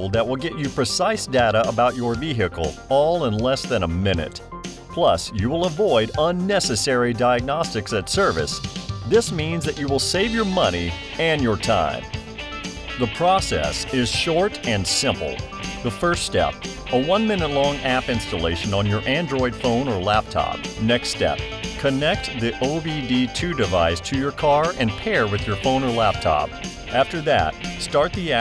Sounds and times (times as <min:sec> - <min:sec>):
Speech: 0:00.0 - 0:12.1, 0:13.0 - 0:28.4
Music: 0:00.0 - 0:28.4.